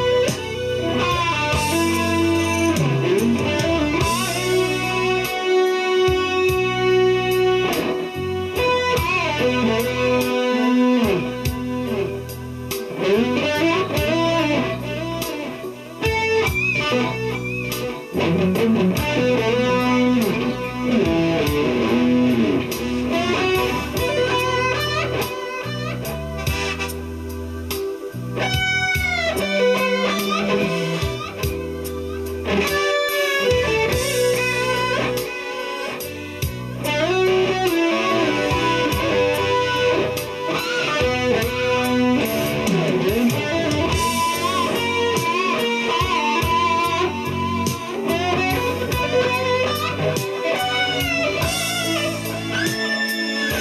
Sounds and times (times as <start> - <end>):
Bass guitar: 0.0 - 53.6.